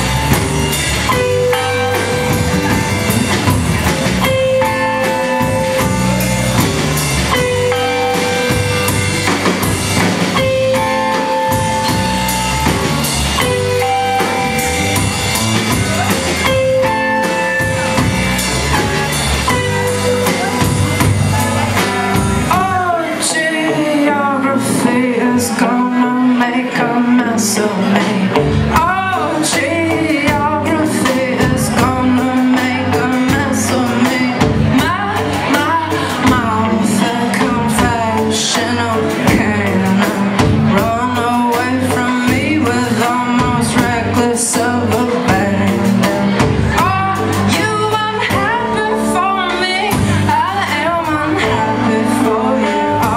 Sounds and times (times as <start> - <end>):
Music: 0.0 - 53.1
Speech: 18.0 - 53.1.